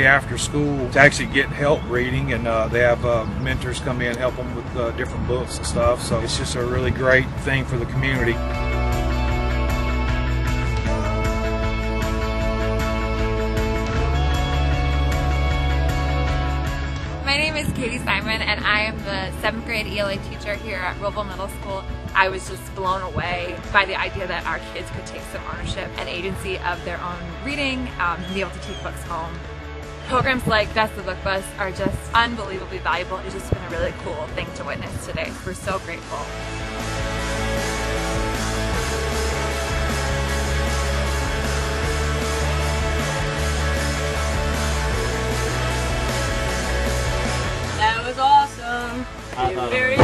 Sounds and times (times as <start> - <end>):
Speech: 0.0 - 8.4, 17.3 - 29.3, 30.1 - 36.3, 47.8 - 50.0
Music: 0.0 - 50.0.